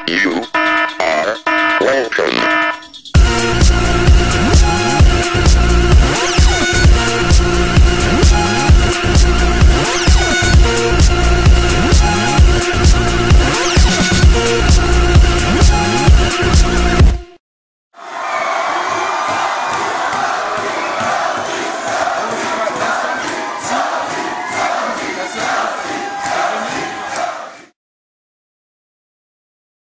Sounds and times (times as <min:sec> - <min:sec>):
Speech: 0:00.0 - 0:02.5, 0:22.2 - 0:23.8, 0:24.6 - 0:27.2.